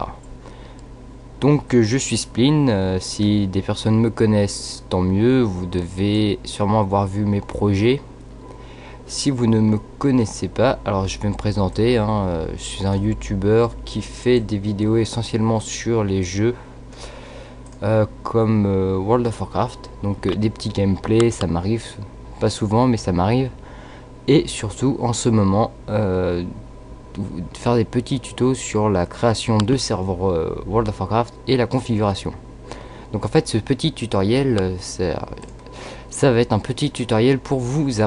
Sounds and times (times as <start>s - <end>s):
Speech: 0.0s - 0.2s, 1.4s - 8.1s, 9.1s - 16.6s, 17.8s - 23.6s, 24.3s - 32.4s, 33.1s - 35.5s, 36.1s - 38.0s.